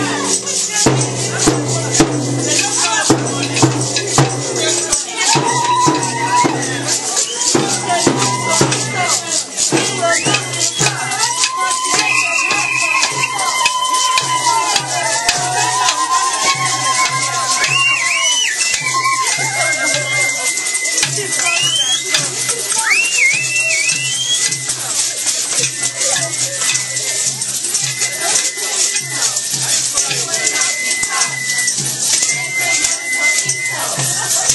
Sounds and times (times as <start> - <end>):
Music: 0.0 - 34.5
Speech: 0.0 - 34.5.